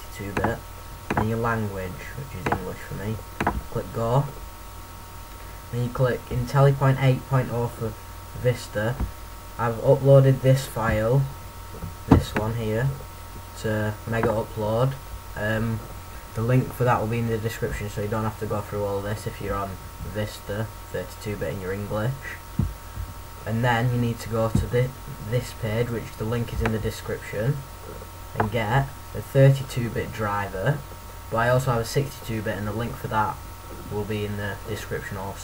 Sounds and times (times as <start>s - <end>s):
Speech: 0.0s - 4.4s, 5.7s - 11.4s, 12.1s - 13.0s, 13.6s - 22.5s, 23.4s - 35.4s.